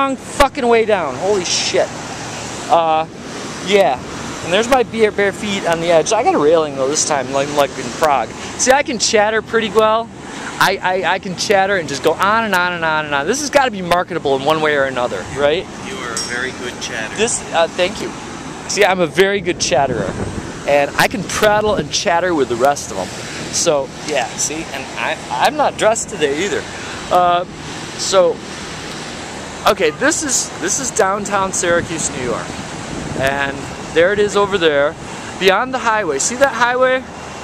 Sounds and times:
Waves, surf: 0.0 - 37.4.

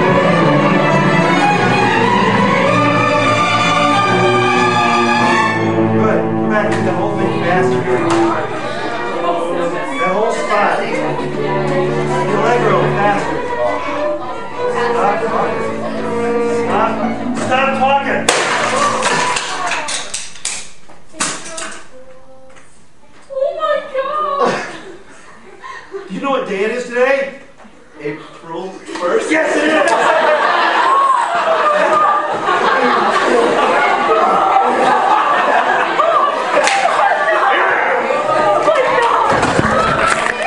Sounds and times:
Music: 0.0 - 22.5.

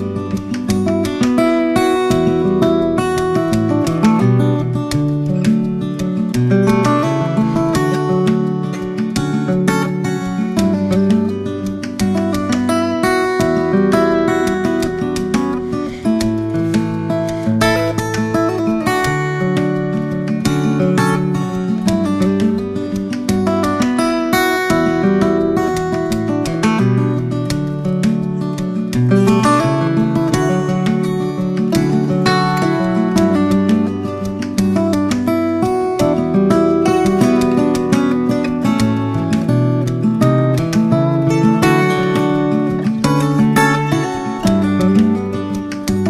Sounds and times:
Strum: 0.0 - 46.0.

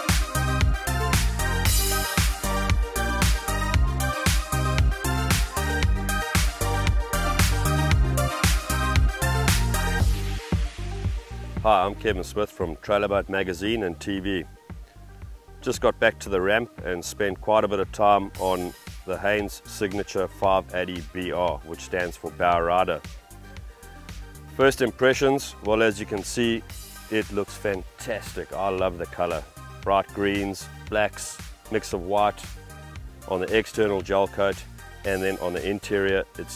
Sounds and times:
Music: 0.0 - 36.5
Speech: 11.6 - 14.5, 15.6 - 23.1, 24.6 - 32.5, 33.3 - 36.5.

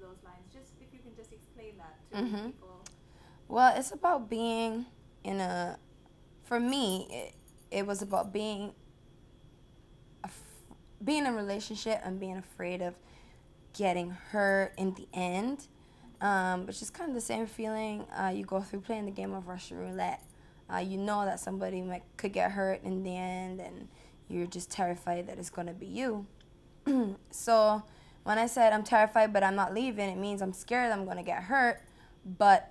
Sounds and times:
Female speech, woman speaking: 0.0 - 2.9, 3.5 - 5.8, 6.5 - 8.8, 11.0 - 13.0, 13.8 - 26.3, 27.4 - 32.7.

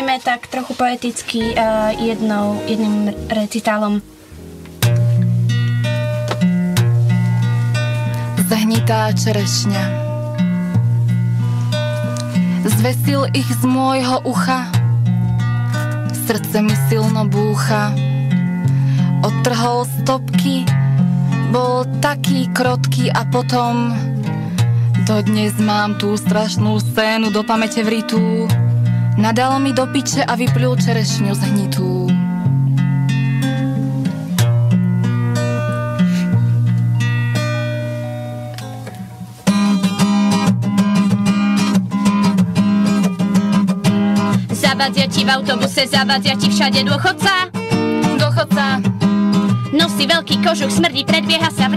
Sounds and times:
Speech: 0.0 - 4.0, 8.4 - 10.0, 12.6 - 14.7, 16.2 - 18.0, 21.5 - 24.1, 25.0 - 28.5, 29.2 - 32.2
Music: 0.0 - 51.7.

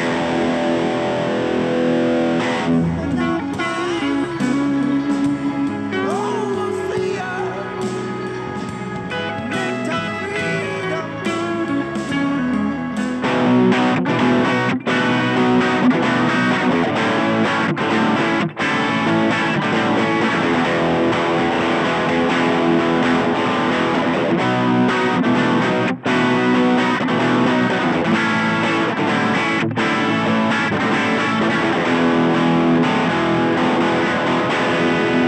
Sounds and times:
Electric guitar: 0.0 - 35.2
Rock music: 0.0 - 35.2.

